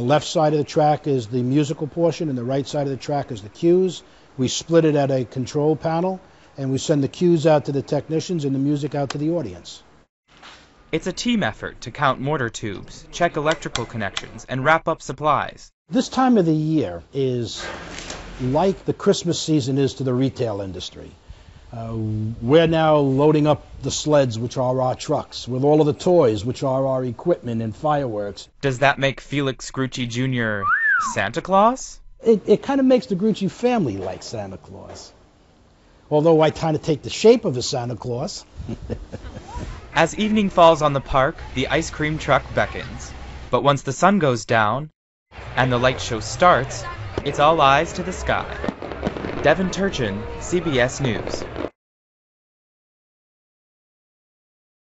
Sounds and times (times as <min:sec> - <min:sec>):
Fireworks: 0:46.8 - 0:51.7.